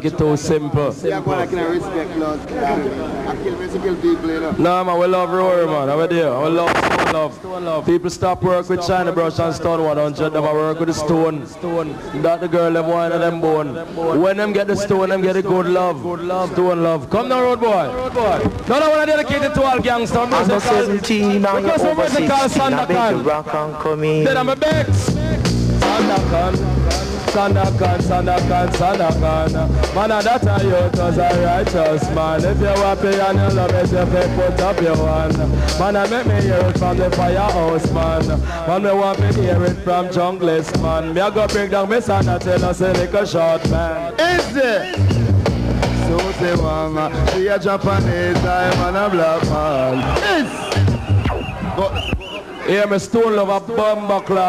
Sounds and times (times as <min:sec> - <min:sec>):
Speech: 0:00.0 - 0:25.2, 0:25.8 - 0:45.0, 0:52.7 - 0:54.4.